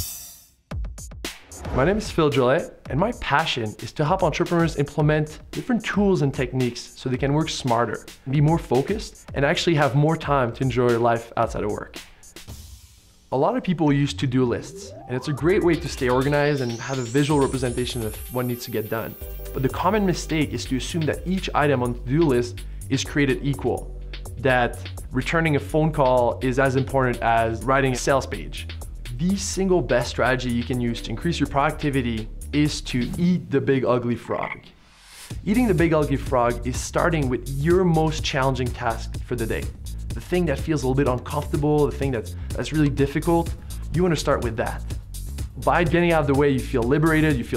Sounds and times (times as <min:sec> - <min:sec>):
Croak: 0:34.4 - 0:34.8.